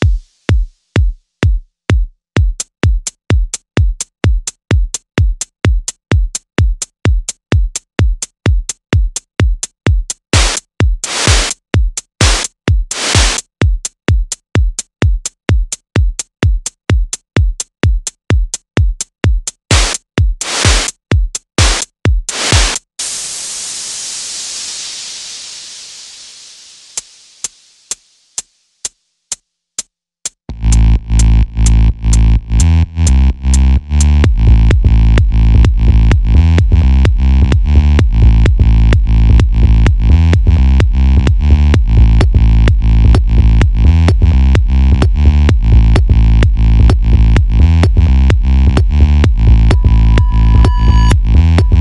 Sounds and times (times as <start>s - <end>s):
Techno: 10.3s - 11.6s, 12.2s - 13.5s, 19.7s - 21.0s, 21.6s - 23.8s, 30.5s - 51.8s.